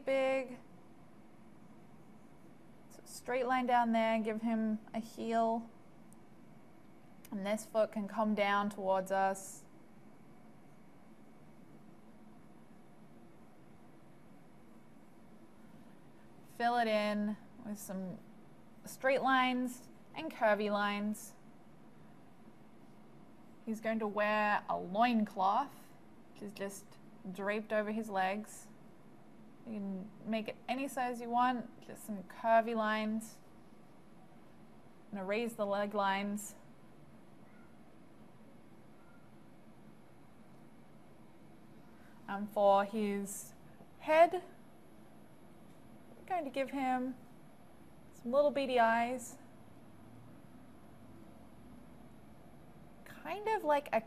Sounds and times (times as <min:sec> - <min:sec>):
Speech: 0:00.0 - 0:00.6, 0:03.0 - 0:05.7, 0:07.3 - 0:09.7, 0:16.6 - 0:18.2, 0:18.9 - 0:21.4, 0:23.7 - 0:25.8, 0:26.4 - 0:28.7, 0:29.7 - 0:33.4, 0:35.1 - 0:36.6, 0:42.3 - 0:44.5, 0:46.2 - 0:47.2, 0:48.2 - 0:49.4, 0:53.1 - 0:54.0
Silence: 0:00.0 - 0:04.2, 0:04.8 - 0:08.0, 0:08.8 - 0:18.9, 0:21.3 - 0:24.8, 0:33.3 - 0:35.4, 0:36.5 - 0:53.4.